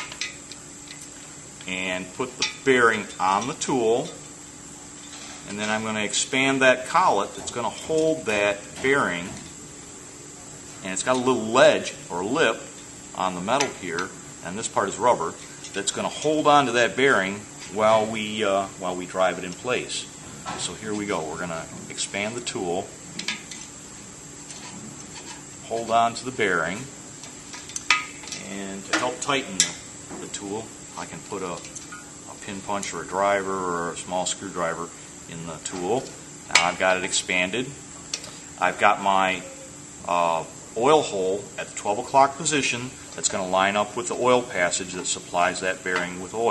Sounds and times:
Speech: 1.6 - 4.2, 5.5 - 9.4, 10.8 - 22.9, 25.6 - 26.9, 28.4 - 31.7, 32.3 - 37.8, 38.6 - 46.5.

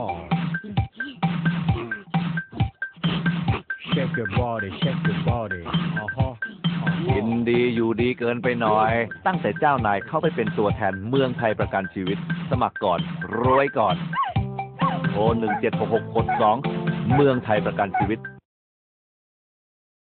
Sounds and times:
Music: 0.0 - 18.4
Speech: 3.8 - 6.4, 7.0 - 14.0, 15.1 - 18.3.

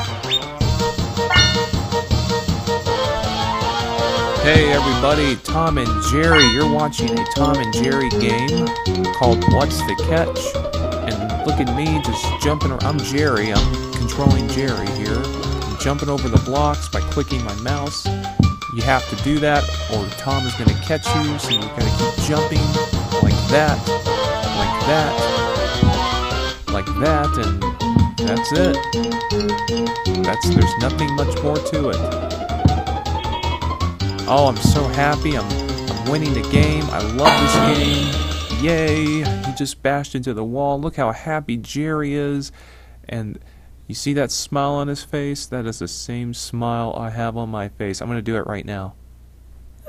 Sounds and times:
Music: 0.0 - 39.6
Speech: 4.4 - 18.1, 18.7 - 23.9, 24.6 - 25.3, 26.7 - 27.6, 28.2 - 28.8, 30.3 - 32.1, 34.3 - 49.0.

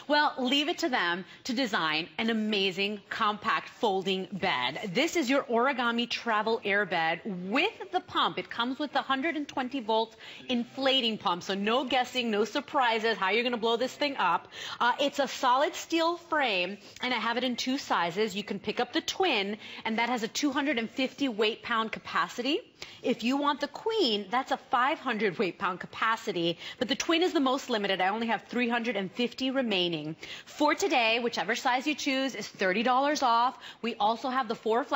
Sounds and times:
Speech: 0.0 - 34.9.

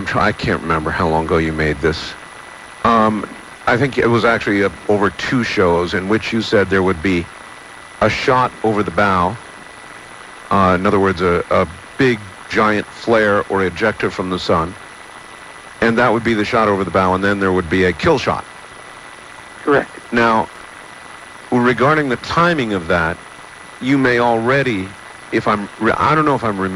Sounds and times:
Speech: 0.0 - 2.2, 2.9 - 7.3, 8.0 - 9.4, 10.5 - 14.8, 15.8 - 18.4, 19.7 - 20.5, 21.5 - 23.2, 23.8 - 26.7.

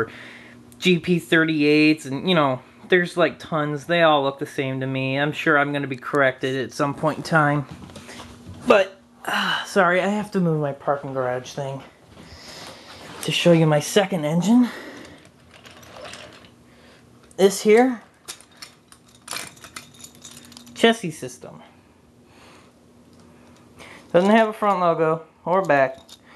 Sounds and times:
Inside, small room: 0.0 - 26.3
Speech: 0.8 - 7.7, 8.6 - 11.9, 13.2 - 14.8, 17.4 - 18.1, 20.8 - 21.7, 24.1 - 26.0.

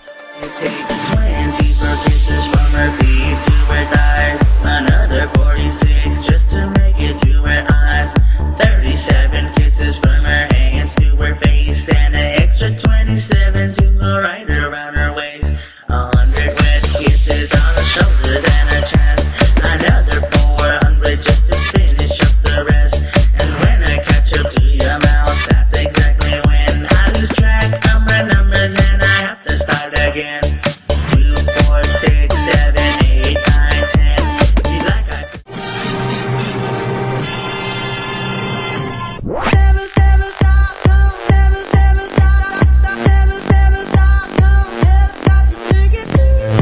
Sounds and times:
Dance music: 0.0 - 14.2, 16.1 - 46.6.

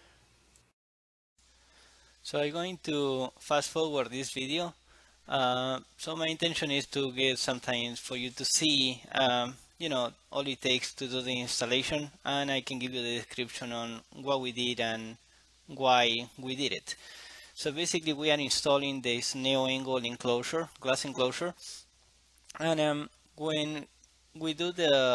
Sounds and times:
Speech: 2.2 - 17.0, 17.6 - 21.9, 22.5 - 25.1.

